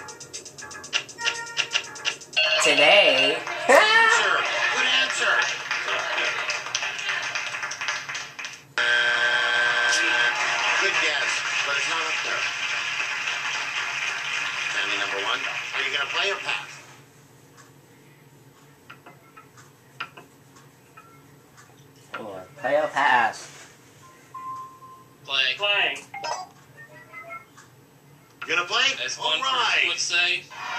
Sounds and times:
Music: 0.0 - 3.7.

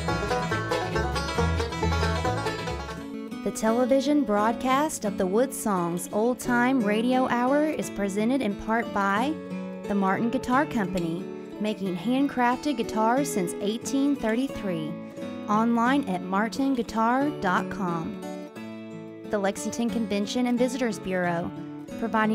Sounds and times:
Music: 0.0 - 22.3
Speech: 3.5 - 18.2, 19.3 - 22.3.

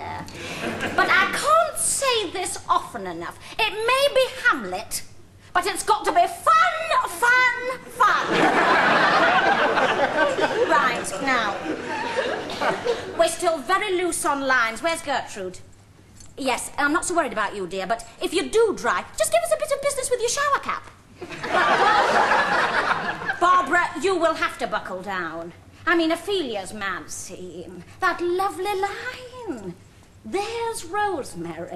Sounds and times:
Speech: 0.0 - 0.3, 1.0 - 8.4, 13.2 - 15.7, 16.4 - 21.0, 23.4 - 31.7.

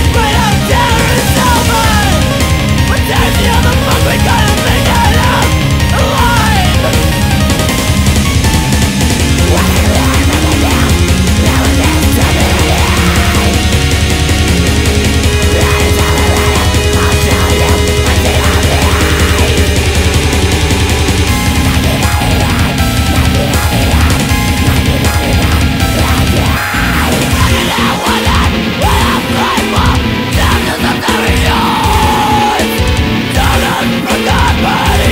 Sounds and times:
Music: 0.0 - 35.1.

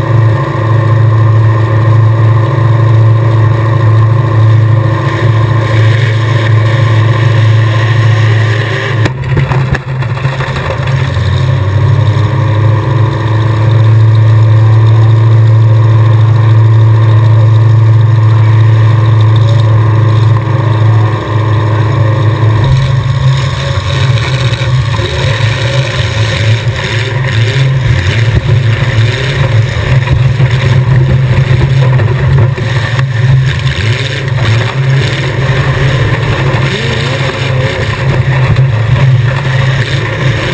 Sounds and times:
Car: 0.0 - 40.5.

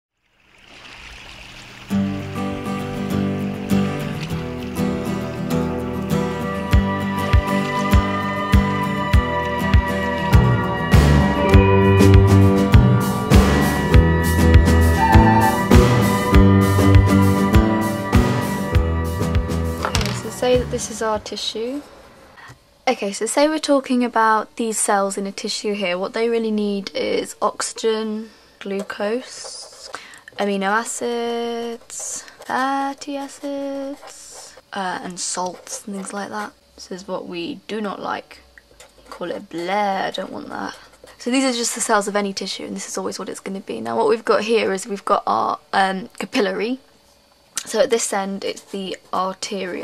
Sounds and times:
Stream: 0.3 - 5.4.

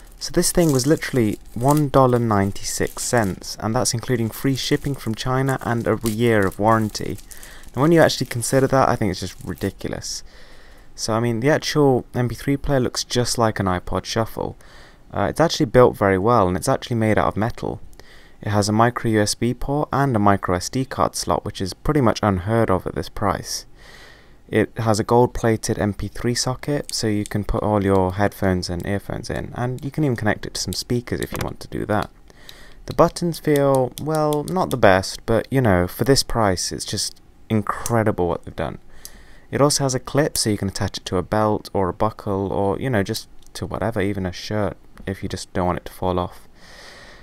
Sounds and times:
Speech: 0.2 - 10.3, 11.0 - 17.8, 18.4 - 23.7, 24.5 - 32.2, 32.8 - 38.8, 39.5 - 46.5.

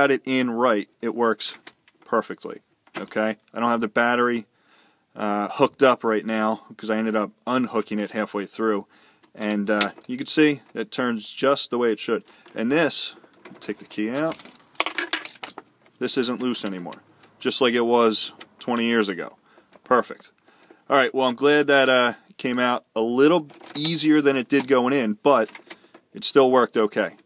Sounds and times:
Speech: 0.0 - 4.5, 5.2 - 14.4, 16.0 - 20.3, 20.9 - 25.5, 26.2 - 27.2.

